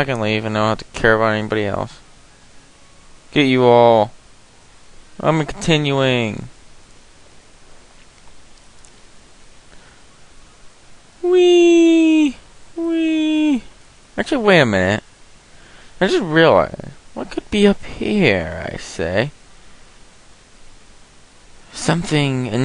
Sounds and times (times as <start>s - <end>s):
Speech: 0.0s - 2.0s, 3.4s - 4.2s, 5.2s - 6.5s, 11.2s - 15.0s, 16.0s - 19.4s, 21.7s - 22.6s.